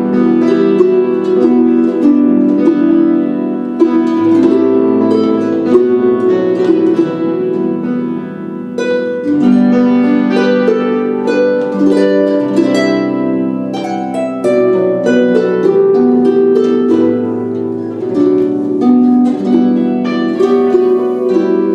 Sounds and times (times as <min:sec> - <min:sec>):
Harp: 0:00.0 - 0:21.7.